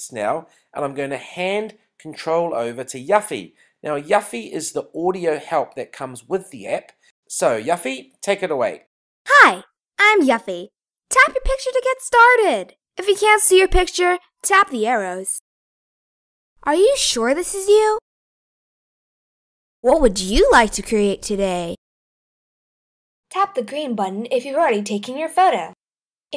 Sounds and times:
Speech: 0.0 - 15.4, 16.7 - 18.0, 19.9 - 21.8, 23.4 - 25.8.

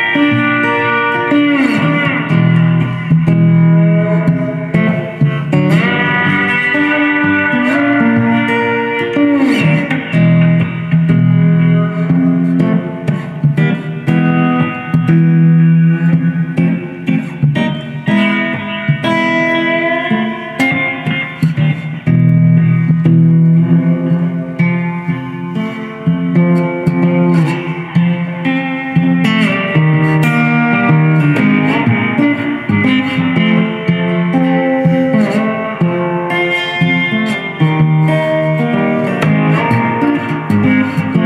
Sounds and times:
Guitar: 0.0 - 41.2.

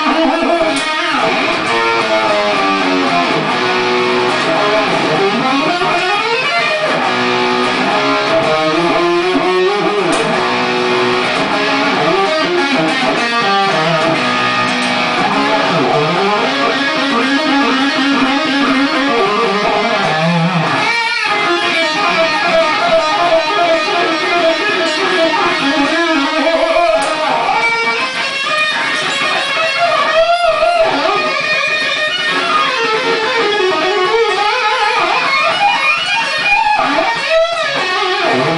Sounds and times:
Music: 0.0 - 38.5.

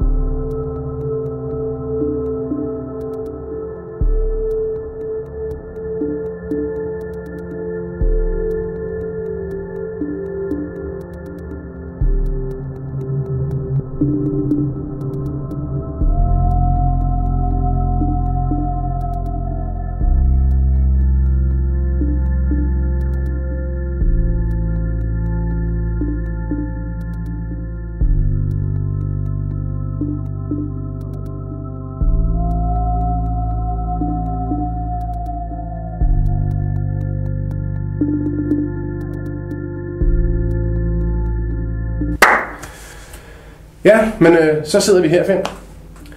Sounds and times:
Music: 0.0 - 46.1.

